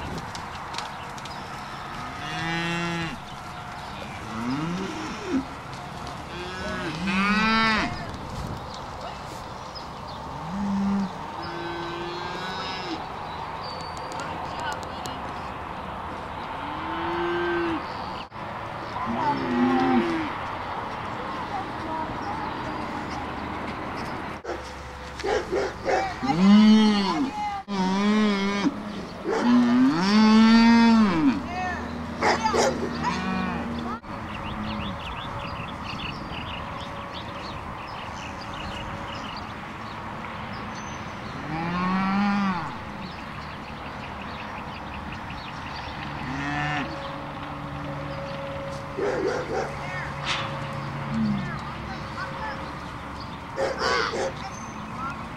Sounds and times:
Moo: 4.3s - 5.5s, 6.3s - 8.0s, 10.4s - 13.0s, 19.4s - 20.3s, 26.3s - 28.8s, 29.4s - 31.4s, 33.1s - 33.7s, 41.4s - 42.7s, 46.2s - 47.0s.

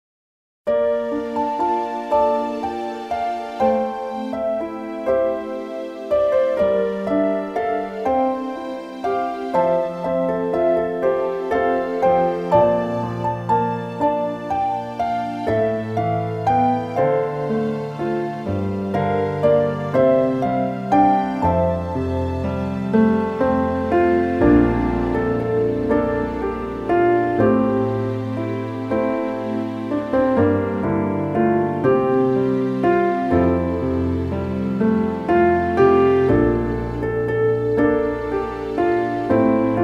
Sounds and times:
Music: 0.7s - 39.8s.

